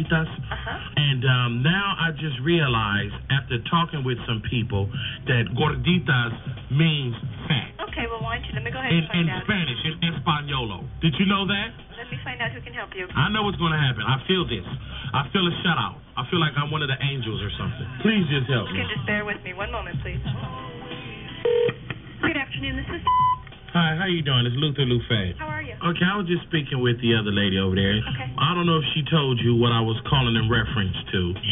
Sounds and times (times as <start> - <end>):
Speech: 0.0 - 20.3, 23.8 - 31.5
Music: 0.0 - 31.5.